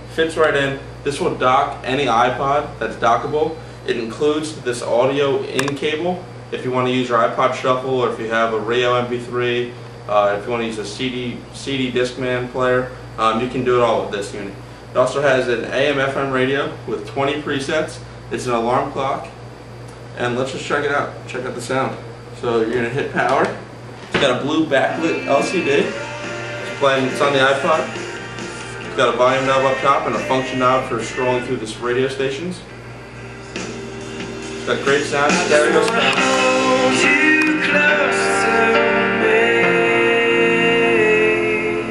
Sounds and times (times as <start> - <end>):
Speech: 0.1 - 19.4, 20.2 - 23.6, 24.2 - 25.9, 26.7 - 27.9, 28.9 - 32.7, 34.7 - 36.2.